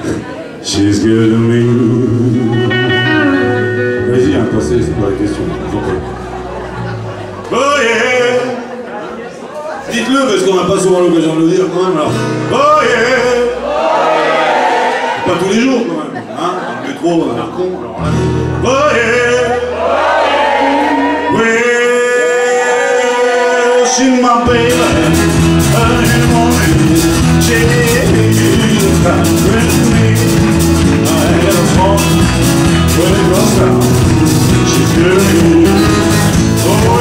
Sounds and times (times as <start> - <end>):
Music: 0.7 - 8.2, 18.0 - 37.0
Speech: 4.0 - 6.1, 8.2 - 12.2, 15.2 - 18.0.